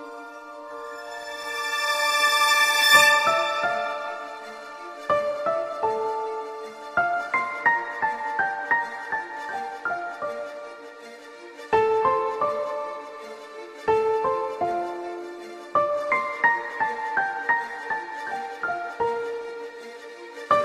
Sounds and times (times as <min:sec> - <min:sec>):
Music: 0:00.0 - 0:20.6.